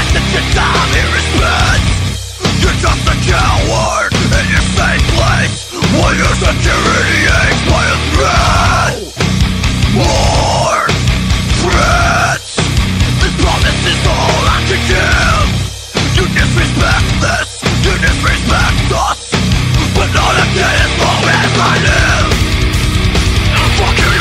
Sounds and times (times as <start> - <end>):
Music: 0.0 - 24.2.